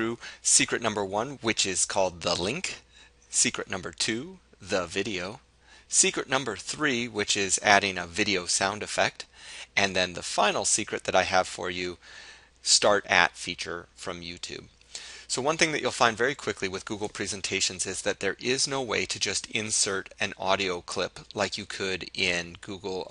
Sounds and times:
Speech: 0:00.0 - 0:12.0, 0:12.6 - 0:14.7, 0:15.3 - 0:23.1.

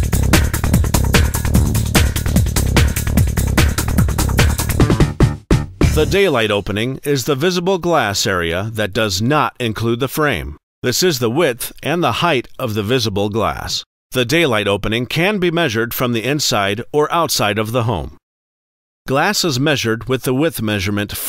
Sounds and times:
Speech: 0:05.9 - 0:18.2, 0:19.1 - 0:21.2.

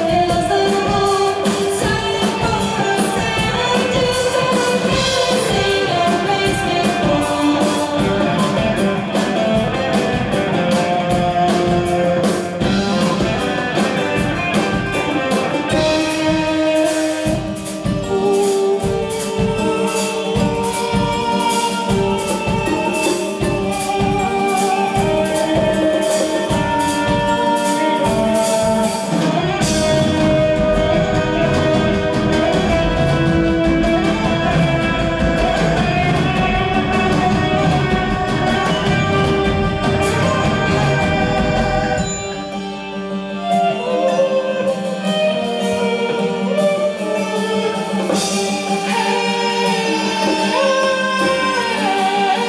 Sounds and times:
Singing: 0:00.0 - 0:09.2, 0:48.2 - 0:52.4
Electric guitar: 0:00.0 - 0:52.4.

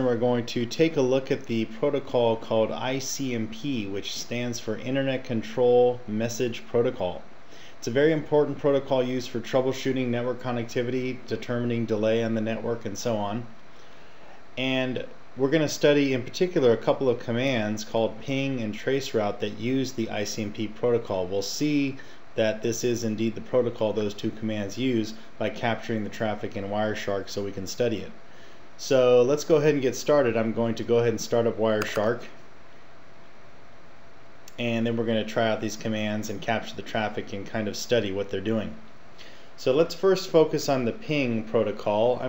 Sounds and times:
Speech: 0:00.0 - 0:13.6, 0:14.6 - 0:28.2, 0:28.8 - 0:32.4, 0:34.5 - 0:38.9, 0:39.6 - 0:42.2.

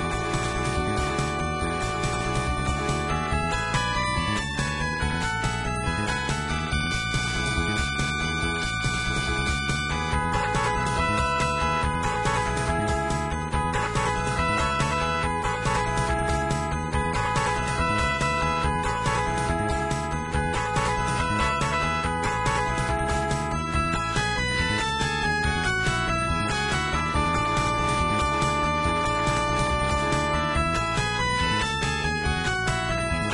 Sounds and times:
Video game music: 0:00.0 - 0:33.3.

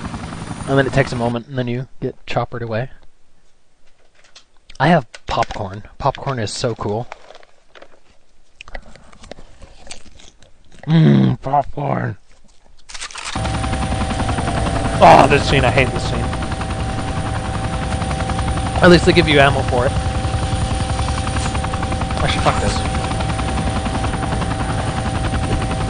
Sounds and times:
Biting: 0:09.6 - 0:11.0.

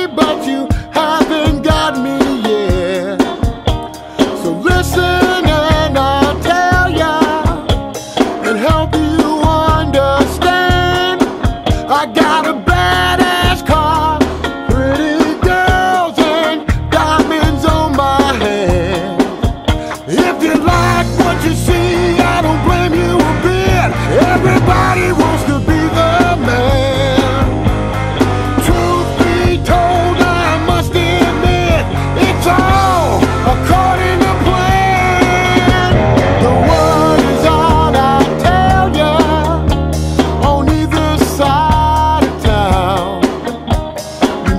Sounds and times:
Music: 0:00.0 - 0:44.5.

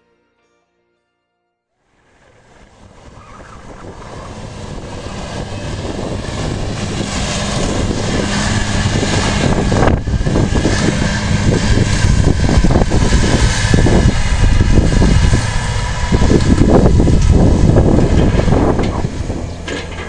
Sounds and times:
Outside, rural or natural: 0:01.8 - 0:20.0
Vehicle: 0:01.8 - 0:20.0.

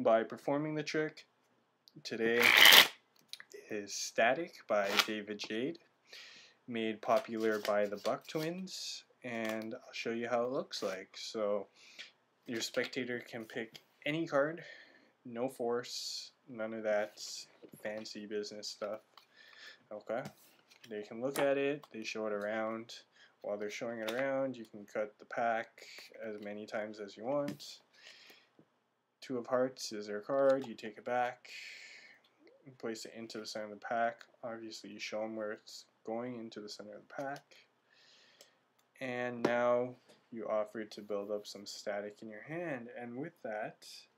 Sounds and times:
Speech: 0:00.0 - 0:01.3, 0:02.0 - 0:02.5, 0:03.4 - 0:05.8, 0:06.7 - 0:11.7, 0:12.5 - 0:14.7, 0:15.3 - 0:19.0, 0:19.9 - 0:27.9, 0:29.2 - 0:31.7, 0:32.6 - 0:37.7, 0:39.0 - 0:44.1.

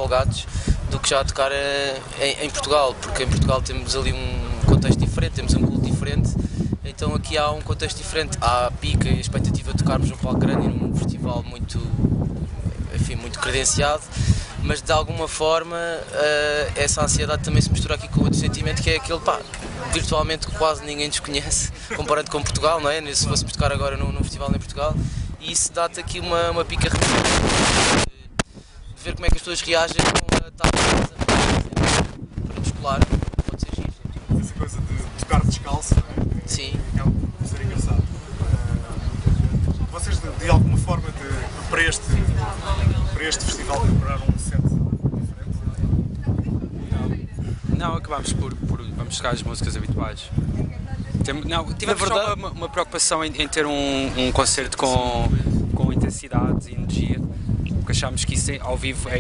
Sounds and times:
Speech: 0:00.0 - 0:27.1, 0:29.0 - 0:31.7, 0:39.8 - 0:57.3, 0:57.9 - 0:59.2.

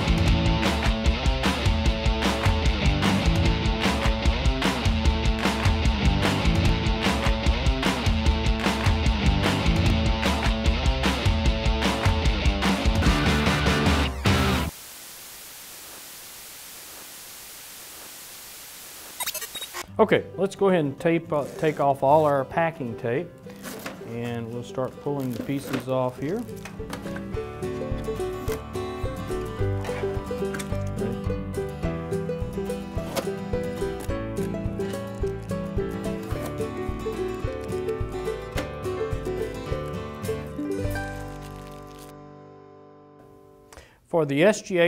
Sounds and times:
Music: 0:00.0 - 0:14.8, 0:19.8 - 0:44.8
Speech: 0:19.9 - 0:23.3, 0:24.1 - 0:26.5, 0:44.1 - 0:44.8.

